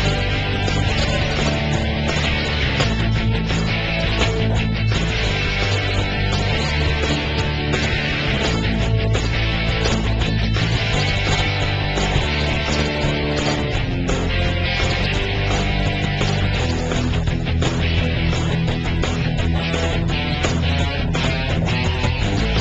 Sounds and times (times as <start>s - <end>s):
Music: 0.0s - 22.6s.